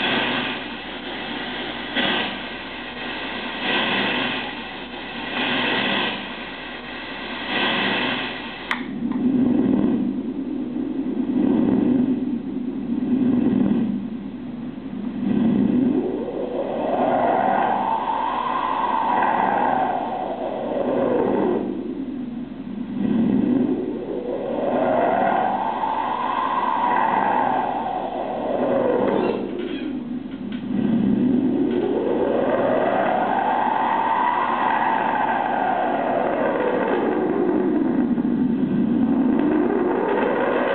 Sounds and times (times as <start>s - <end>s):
Cacophony: 0.0s - 40.7s
White noise: 0.0s - 40.7s.